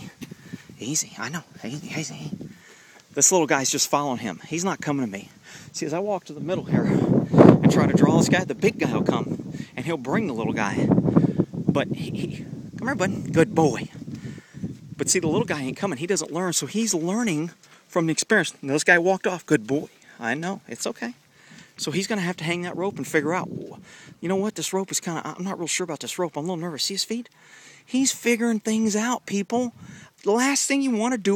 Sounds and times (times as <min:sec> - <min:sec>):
Speech: 0:00.8 - 0:02.4, 0:03.2 - 0:07.0, 0:07.6 - 0:10.9, 0:11.7 - 0:14.0, 0:15.0 - 0:21.2, 0:21.8 - 0:27.3, 0:27.9 - 0:31.3.